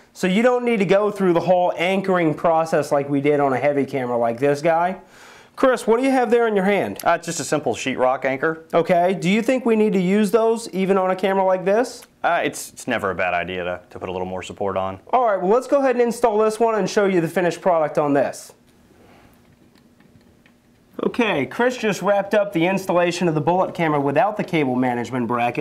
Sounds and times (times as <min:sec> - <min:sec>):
Speech: 0:00.2 - 0:05.0, 0:05.6 - 0:18.6, 0:21.0 - 0:25.6.